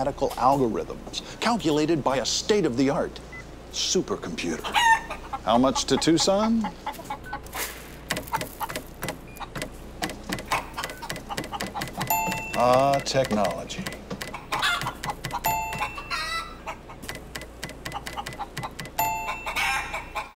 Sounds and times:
Speech: 0:00.0 - 0:04.7, 0:12.6 - 0:13.9
Chicken, rooster: 0:04.5 - 0:07.4, 0:14.4 - 0:17.0, 0:17.9 - 0:20.3.

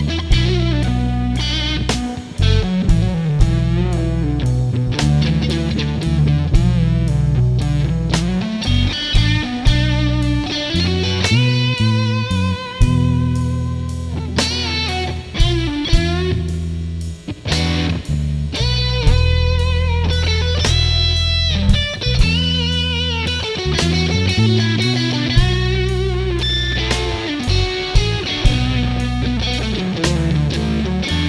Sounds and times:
Guitar: 0:00.0 - 0:31.2.

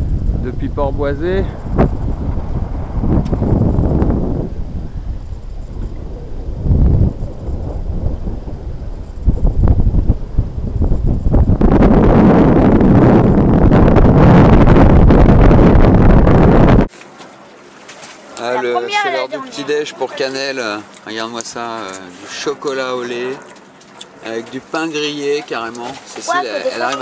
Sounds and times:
Wind noise (microphone): 0:00.0 - 0:16.9.

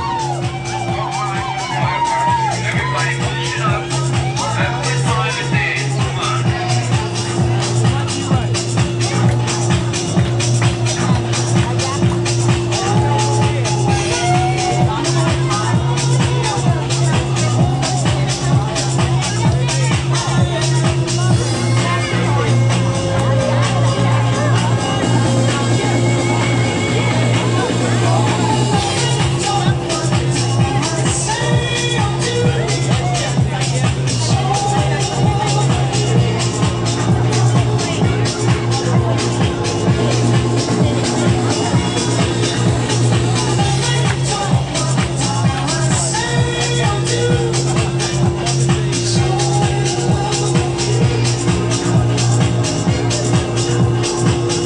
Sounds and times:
Music: 0:00.0 - 0:54.6
Speech: 0:00.0 - 0:54.6.

